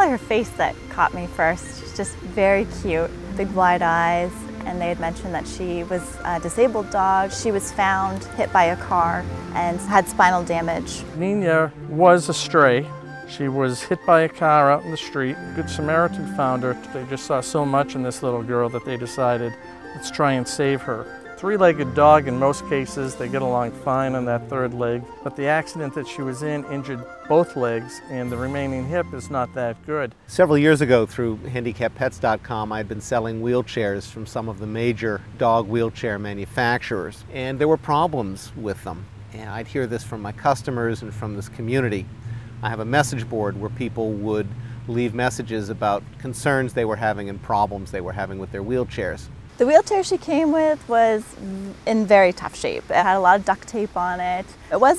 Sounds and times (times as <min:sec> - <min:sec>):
Music: 0:00.0 - 0:31.7
Speech: 0:13.4 - 0:42.0, 0:42.6 - 0:54.9.